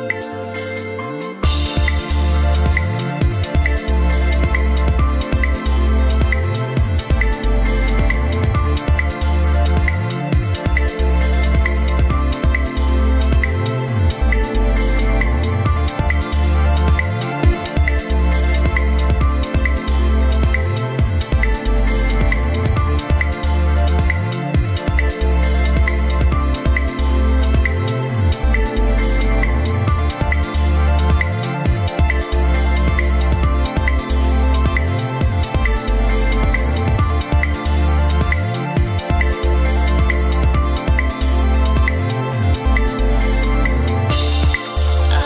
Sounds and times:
Music: 0.0 - 45.2.

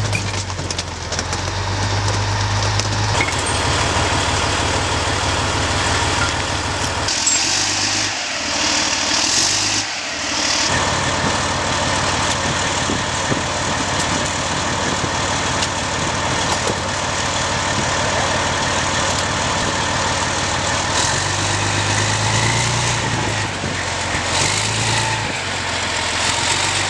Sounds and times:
Motor vehicle (road): 0.0 - 26.8.

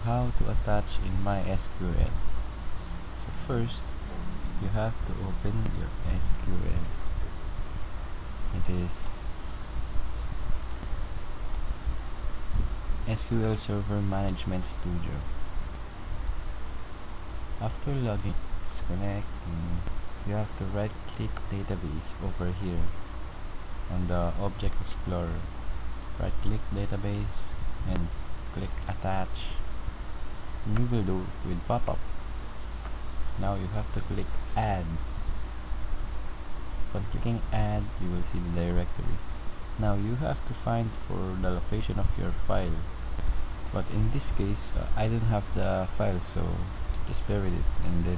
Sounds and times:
Speech: 0.0 - 2.2, 3.2 - 3.9, 4.6 - 7.0, 8.5 - 9.3, 13.1 - 15.3, 17.6 - 22.9, 23.9 - 25.5, 26.2 - 29.6, 30.6 - 32.0, 33.4 - 35.0, 36.9 - 39.2, 39.8 - 42.9, 43.7 - 48.1.

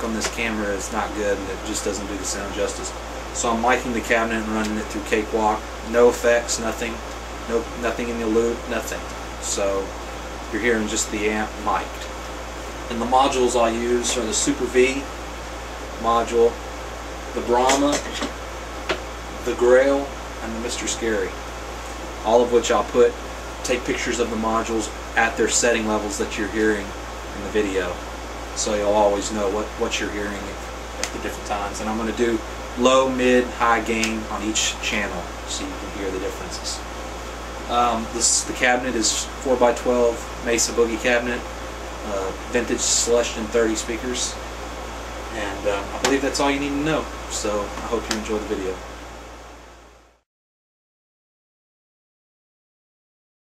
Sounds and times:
Speech: 0.0 - 12.1, 12.9 - 15.1, 16.0 - 16.6, 17.3 - 18.4, 19.4 - 21.4, 22.2 - 28.0, 28.6 - 36.9, 37.7 - 44.4, 45.3 - 48.8.

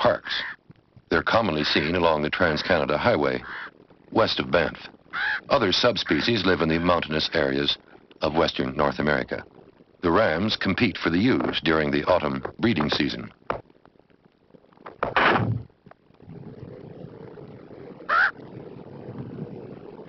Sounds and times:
Speech: 0.0 - 3.5, 4.1 - 4.9, 5.5 - 13.3.

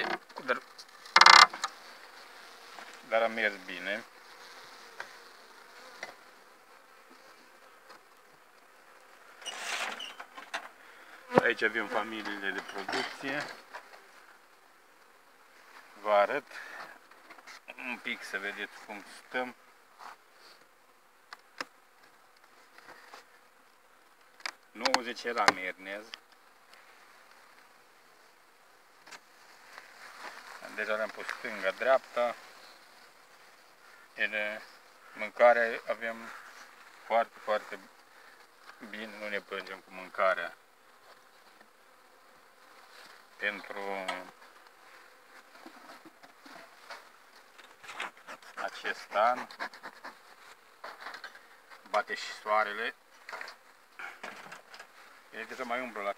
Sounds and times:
Bee, wasp, etc.: 0.0 - 56.1
Fly, housefly: 0.0 - 56.1.

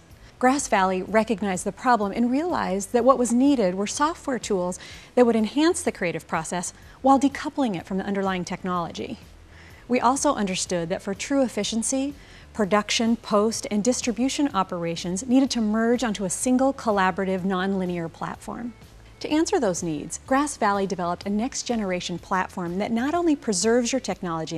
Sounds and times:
Music: 0.0 - 24.5
Speech: 0.4 - 9.2, 9.9 - 24.5.

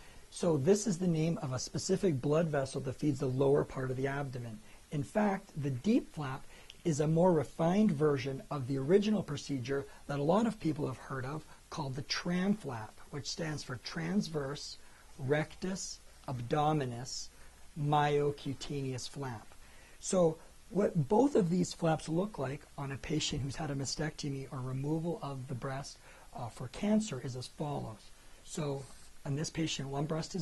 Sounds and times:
Speech: 0.0 - 30.4.

